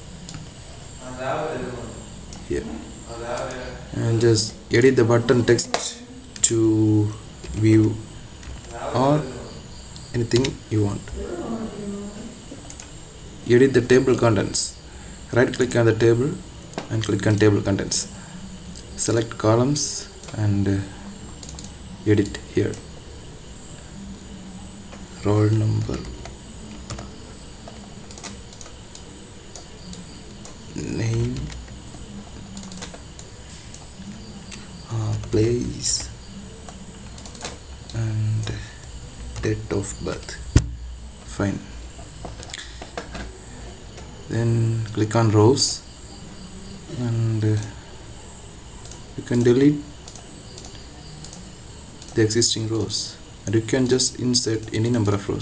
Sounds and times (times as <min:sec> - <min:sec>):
Typing: 0:10.0 - 0:10.6, 0:21.4 - 0:22.9, 0:25.8 - 0:38.6, 0:48.8 - 0:52.9.